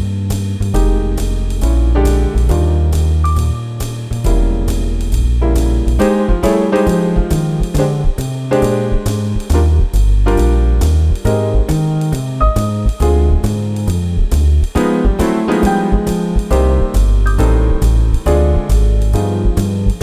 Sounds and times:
Music: 0.0 - 20.0.

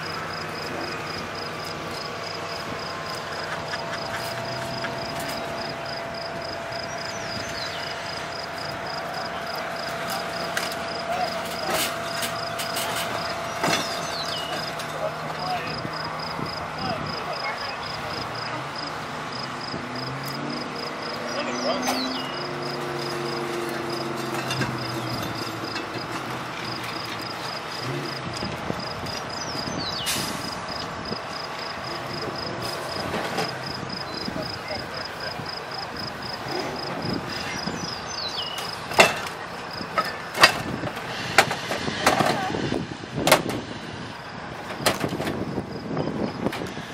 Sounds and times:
Speech: 21.3 - 22.2, 34.1 - 36.0.

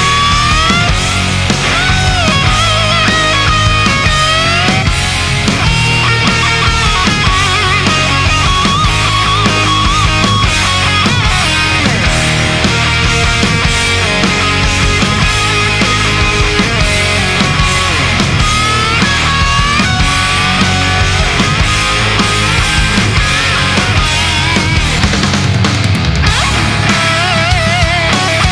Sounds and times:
Electric guitar: 0.0 - 28.5.

